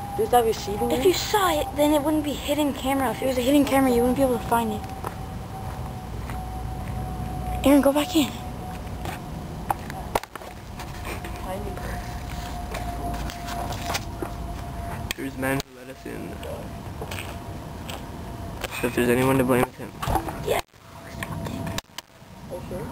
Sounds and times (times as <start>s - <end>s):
Outside, urban or manmade: 0.0s - 22.9s
Child speech, kid speaking: 0.2s - 4.8s, 7.6s - 8.4s, 11.4s - 12.0s, 20.4s - 20.6s.